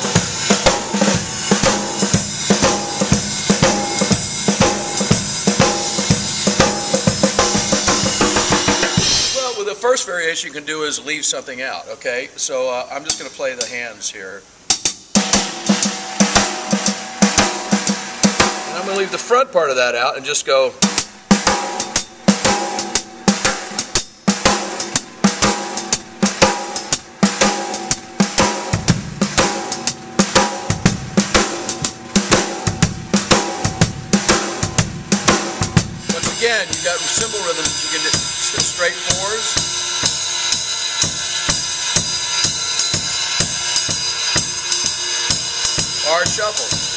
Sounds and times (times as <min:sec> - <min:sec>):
Bass drum: 0:00.0 - 0:09.4, 0:15.2 - 0:19.2, 0:20.9 - 0:44.6
Drum kit: 0:00.0 - 0:10.5, 0:12.7 - 0:46.9
Rimshot: 0:20.8 - 0:43.2.